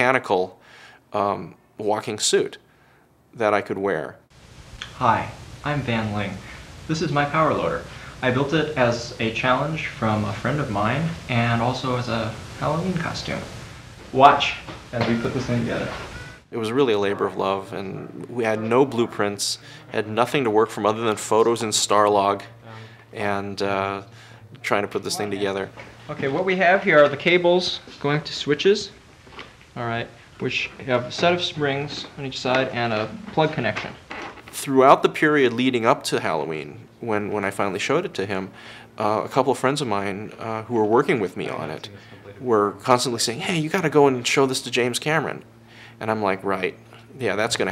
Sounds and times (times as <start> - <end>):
Speech: 0.0 - 2.6, 3.3 - 4.2, 4.8 - 29.0, 29.8 - 47.7
Inside, small room: 0.0 - 47.7.